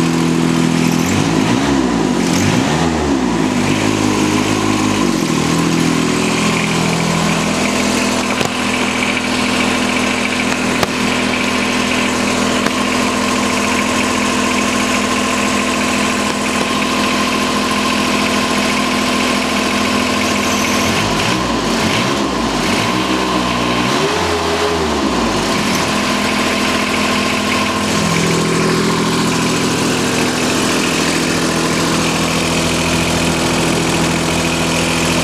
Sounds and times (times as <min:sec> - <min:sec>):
Lawn mower: 0:00.0 - 0:35.2
Vehicle: 0:00.0 - 0:35.2.